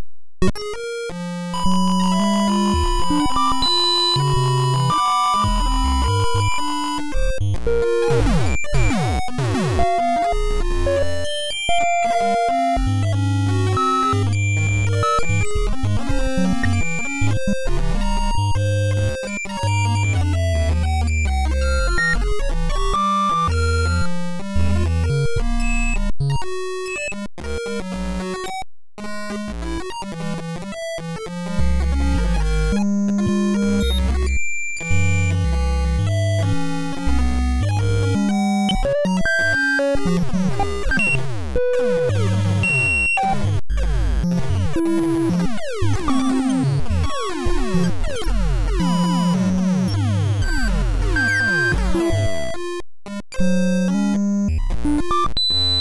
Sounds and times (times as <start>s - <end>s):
Music: 0.0s - 55.8s.